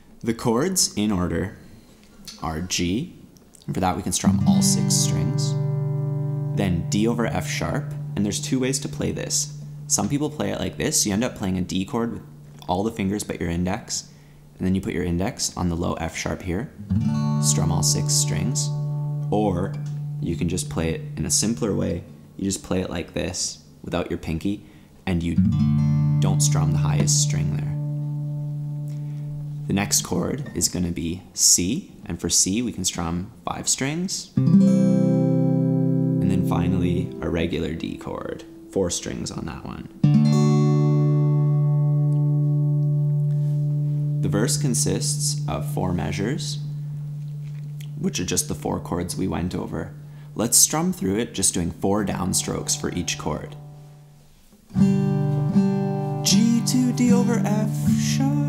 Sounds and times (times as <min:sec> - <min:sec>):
Speech: 0:00.2 - 0:01.6, 0:02.3 - 0:05.6, 0:06.6 - 0:25.5, 0:26.2 - 0:27.9, 0:29.6 - 0:34.4, 0:36.2 - 0:40.0, 0:44.2 - 0:46.7, 0:47.8 - 0:53.6, 0:56.3 - 0:58.4
Acoustic guitar: 0:03.6 - 0:13.5, 0:15.8 - 0:23.0, 0:24.7 - 0:30.9, 0:34.3 - 0:58.4.